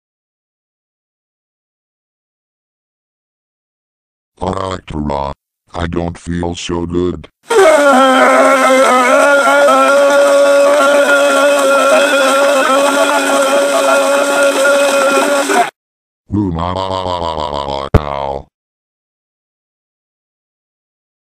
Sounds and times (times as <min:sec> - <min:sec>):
Speech: 0:04.4 - 0:07.4, 0:16.3 - 0:18.5.